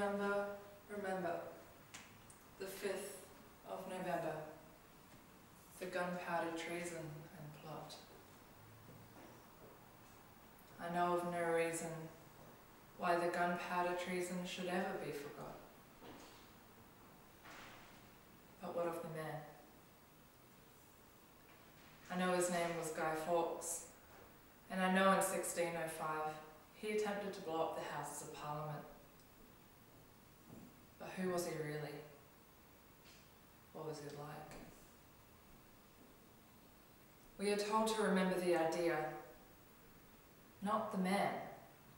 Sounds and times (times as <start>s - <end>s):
Narration, monologue: 0.0s - 41.9s.